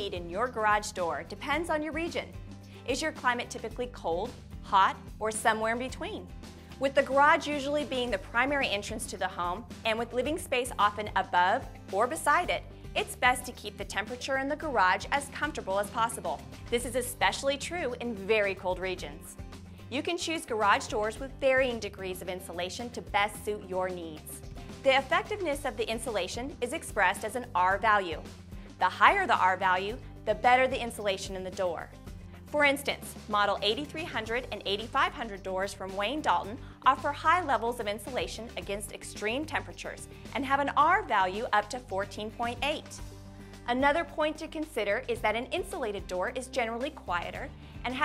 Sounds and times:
Speech: 0.0s - 28.2s, 28.8s - 31.9s, 32.5s - 43.0s, 43.7s - 48.0s
Music: 0.0s - 48.0s.

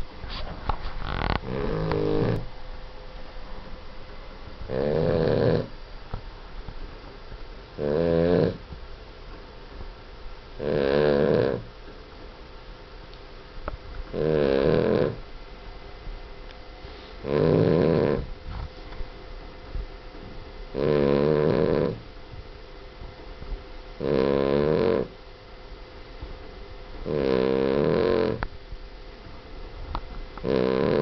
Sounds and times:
Snoring: 1.0s - 2.5s, 4.7s - 5.7s, 7.8s - 8.6s, 10.6s - 11.7s, 14.1s - 15.2s, 17.2s - 18.3s, 20.8s - 22.1s, 24.0s - 25.2s, 27.0s - 28.5s, 30.4s - 31.0s.

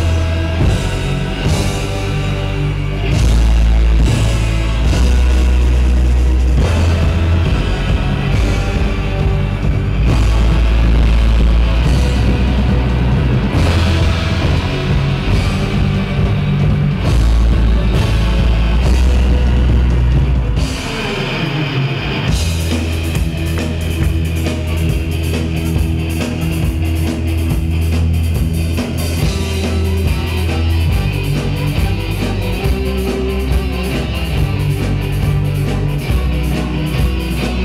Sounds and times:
Progressive rock: 0.0s - 37.6s.

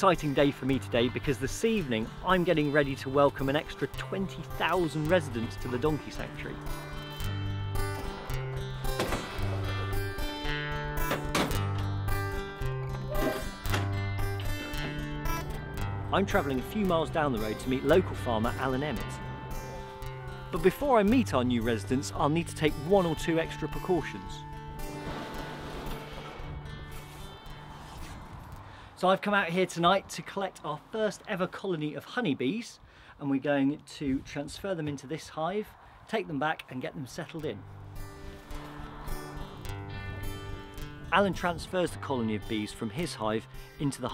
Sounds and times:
Speech: 0.0s - 6.6s, 16.1s - 19.2s, 20.5s - 24.4s, 29.0s - 37.6s, 41.1s - 44.1s
Music: 0.0s - 28.9s, 37.4s - 44.1s.

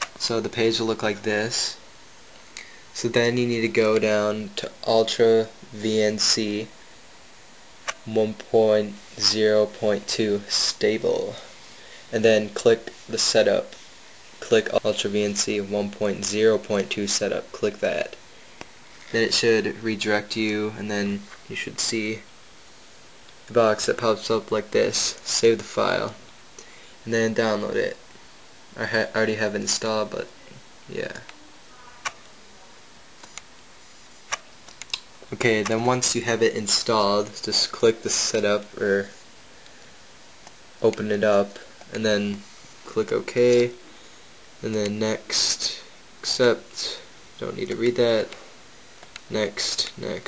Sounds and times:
Speech: 0.2s - 1.8s, 3.0s - 6.8s, 8.0s - 11.5s, 12.1s - 13.8s, 14.4s - 18.2s, 19.1s - 22.3s, 23.5s - 26.2s, 27.0s - 28.0s, 28.8s - 32.9s, 35.3s - 39.2s, 40.8s - 43.8s, 44.6s - 48.4s, 49.3s - 50.2s.

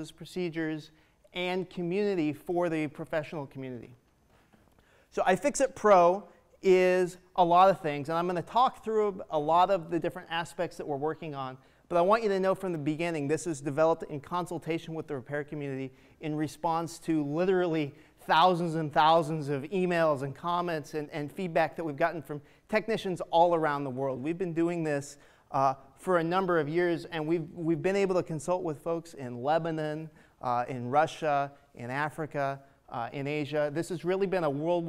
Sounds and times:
Speech: 0.0s - 4.0s, 5.1s - 34.8s.

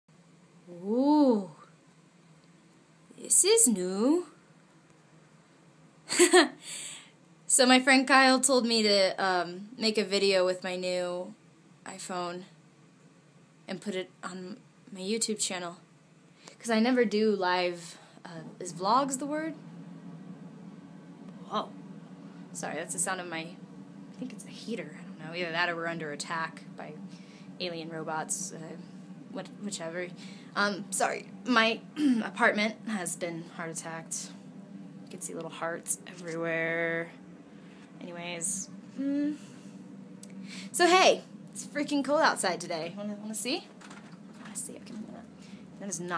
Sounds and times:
Inside, small room: 0.1s - 46.1s
Speech: 0.7s - 1.7s, 3.2s - 4.4s, 7.5s - 12.5s, 13.7s - 15.8s, 16.6s - 19.6s, 22.6s - 23.6s, 24.2s - 27.0s, 27.6s - 28.8s, 29.4s - 34.4s, 35.1s - 37.1s, 38.0s - 39.4s, 40.7s - 43.7s, 44.4s - 46.1s.

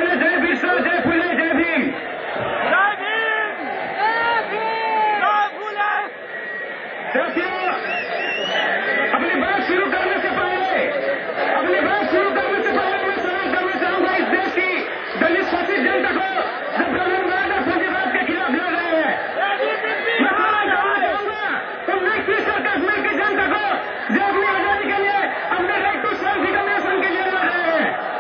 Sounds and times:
Male speech, man speaking: 0.0s - 2.0s, 2.7s - 3.6s, 4.2s - 6.1s, 7.1s - 28.0s.

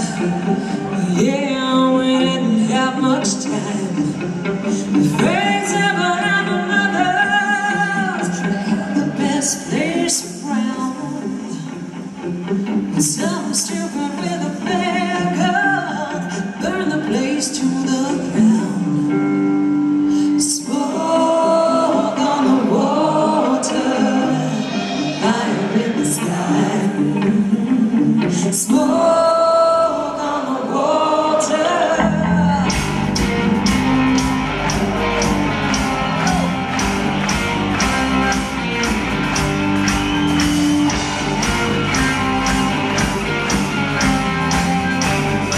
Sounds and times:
Music: 0.0s - 45.5s.

